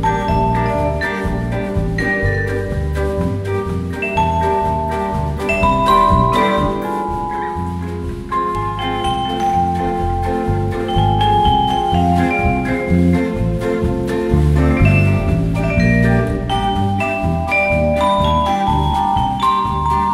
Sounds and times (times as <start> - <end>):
Bowed string instrument: 0.0 - 20.1
Marimba, xylophone: 0.0 - 20.1
Vibraphone: 0.0 - 20.1.